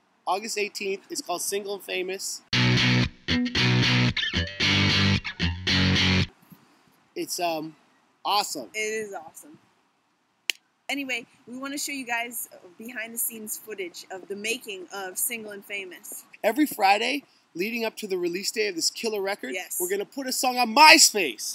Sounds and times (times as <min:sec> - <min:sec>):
Speech: 0:00.3 - 0:02.5, 0:07.2 - 0:09.6, 0:10.9 - 0:21.5.